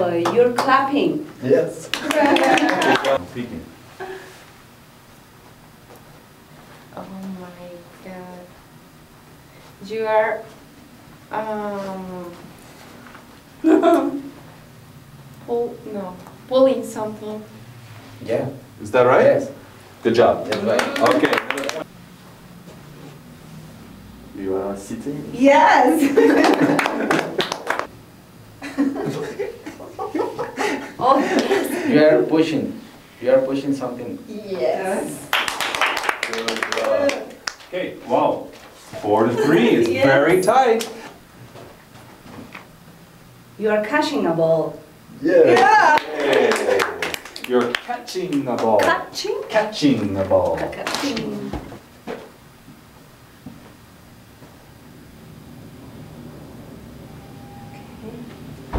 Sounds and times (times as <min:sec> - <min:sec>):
Conversation: 0:00.0 - 0:54.8.